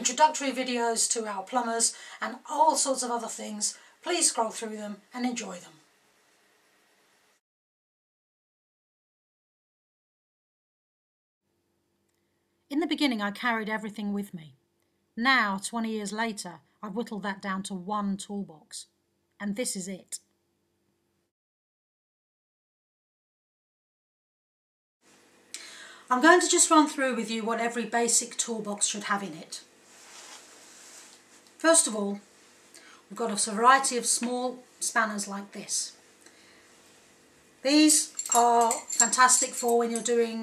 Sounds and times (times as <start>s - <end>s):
Speech: 0.0s - 5.9s, 12.7s - 14.6s, 15.2s - 20.2s, 26.1s - 29.7s, 31.6s - 32.3s, 33.1s - 36.0s, 37.6s - 40.4s.